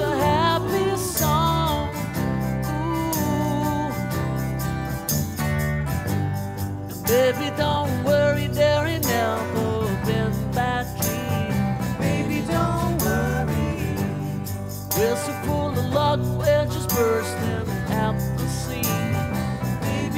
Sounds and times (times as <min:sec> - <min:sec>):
Music: 0:00.0 - 0:20.1.